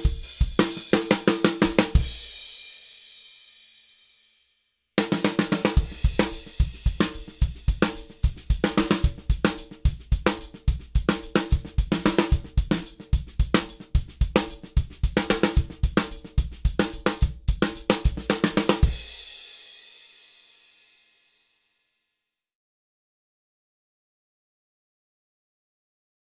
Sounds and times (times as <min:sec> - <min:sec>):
Bass drum: 0:00.0 - 0:02.3, 0:05.6 - 0:19.2
Snare drum: 0:00.0 - 0:02.6, 0:05.0 - 0:19.6
Drum kit: 0:00.0 - 0:03.4, 0:05.0 - 0:20.5.